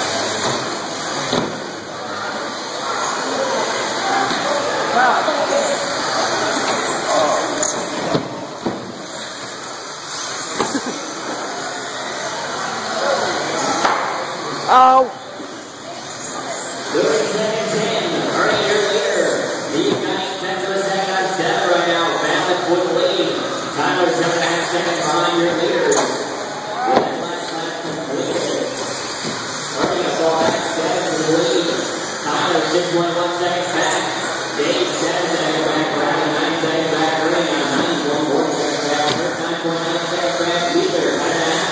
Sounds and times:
Speech: 0:16.0 - 0:28.9, 0:29.7 - 0:41.7.

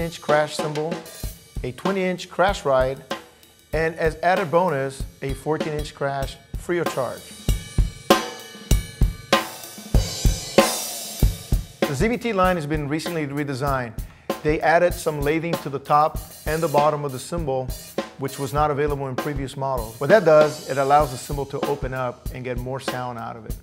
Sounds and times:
Bass drum: 0:00.0 - 0:23.6
Drum kit: 0:00.0 - 0:23.6.

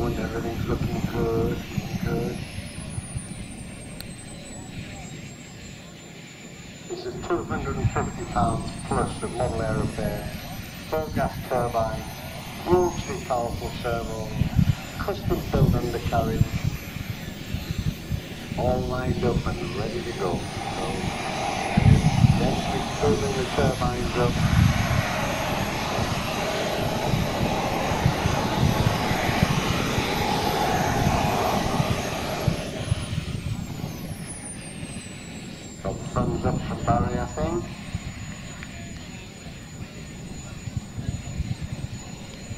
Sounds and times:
Speech: 0:00.0 - 0:02.4, 0:06.9 - 0:16.6, 0:18.6 - 0:21.1, 0:22.3 - 0:24.6, 0:35.8 - 0:37.8.

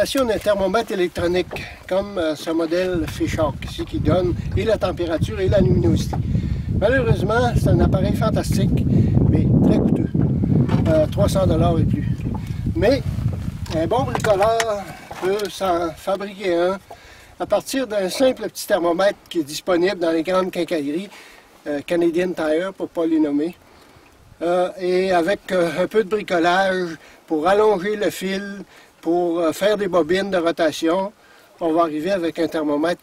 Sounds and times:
Speech: 0:00.0 - 0:06.2, 0:06.8 - 0:10.2, 0:10.8 - 0:12.2, 0:12.8 - 0:13.1, 0:13.7 - 0:16.8, 0:17.4 - 0:21.1, 0:21.7 - 0:23.6, 0:24.4 - 0:33.0.

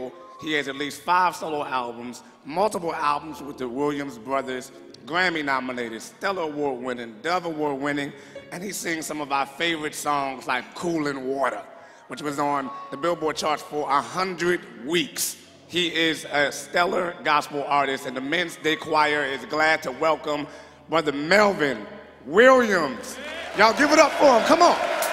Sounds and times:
Speech: 0:00.0 - 0:24.8.

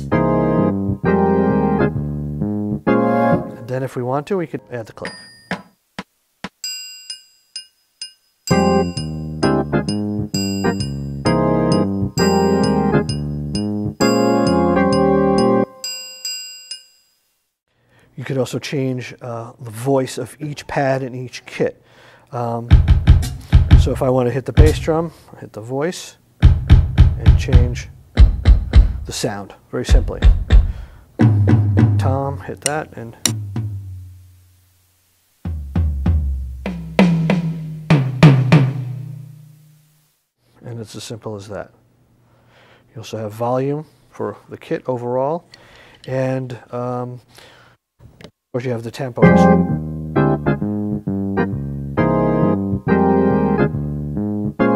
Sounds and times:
Speech: 0:03.6 - 0:05.2, 0:18.2 - 0:22.8, 0:23.8 - 0:26.2, 0:27.2 - 0:27.9, 0:29.1 - 0:30.3, 0:32.0 - 0:33.3, 0:40.6 - 0:41.8, 0:42.9 - 0:45.5, 0:46.1 - 0:47.2, 0:48.5 - 0:49.6
Drum kit: 0:08.5 - 0:15.6, 0:22.7 - 0:25.1, 0:26.4 - 0:29.2, 0:29.9 - 0:34.4, 0:35.4 - 0:39.9
Drum: 0:22.7 - 0:25.0, 0:26.4 - 0:29.2, 0:29.9 - 0:34.4, 0:35.4 - 0:39.8.

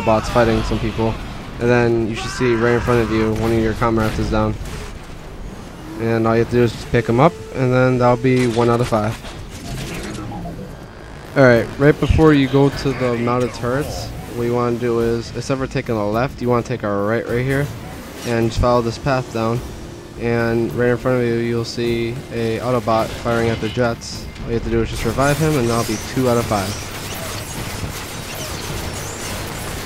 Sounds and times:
Speech: 0:00.0 - 0:04.6, 0:06.0 - 0:09.2, 0:11.4 - 0:17.7, 0:18.3 - 0:19.6, 0:20.2 - 0:26.8.

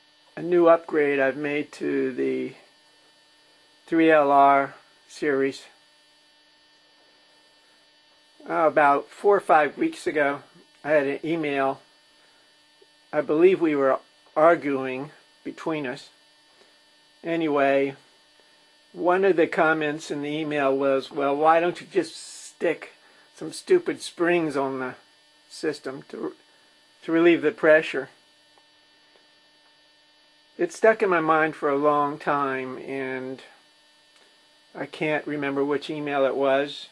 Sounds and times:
Speech: 0:00.4 - 0:02.6, 0:03.9 - 0:05.7, 0:08.4 - 0:11.8, 0:13.2 - 0:16.2, 0:17.2 - 0:18.0, 0:19.0 - 0:26.4, 0:27.0 - 0:28.2, 0:30.6 - 0:33.6, 0:34.7 - 0:36.9.

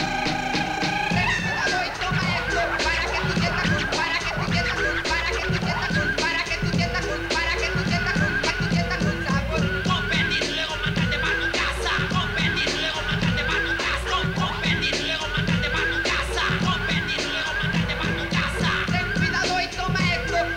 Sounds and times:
Music: 0:00.0 - 0:20.5.

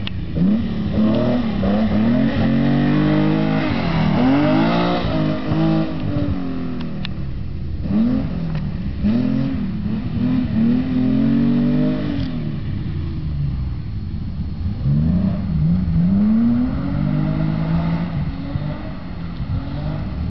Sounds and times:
Car: 0:00.0 - 0:20.3.

